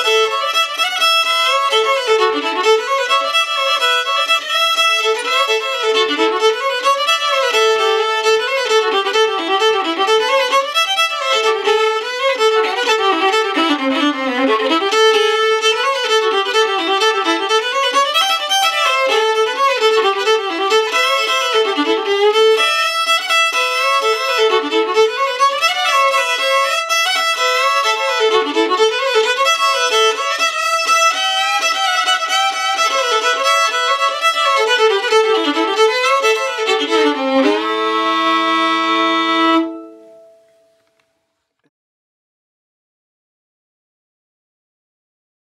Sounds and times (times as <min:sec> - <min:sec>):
Violin, fiddle: 0:00.0 - 0:40.6.